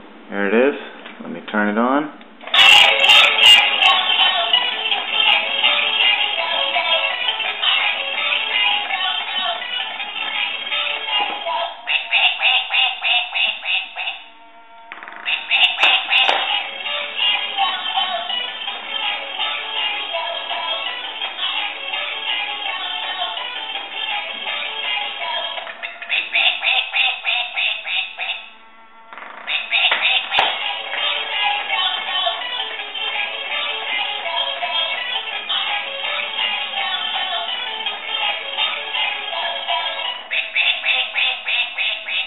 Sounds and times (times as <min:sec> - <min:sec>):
Music: 0:02.5 - 0:12.8, 0:15.3 - 0:27.0, 0:29.7 - 0:42.2
Quack: 0:11.9 - 0:14.3, 0:15.3 - 0:16.5, 0:25.8 - 0:28.5, 0:29.5 - 0:30.5, 0:40.3 - 0:42.2.